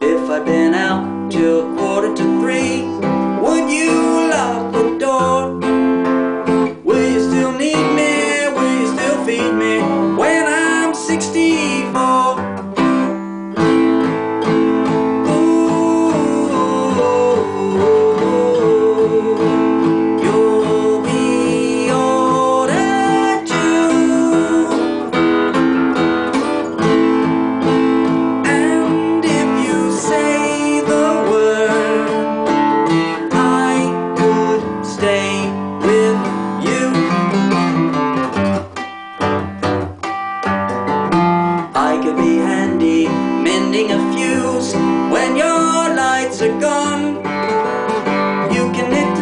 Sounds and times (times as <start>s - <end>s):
Acoustic guitar: 0.0s - 49.2s
Strum: 0.0s - 49.2s.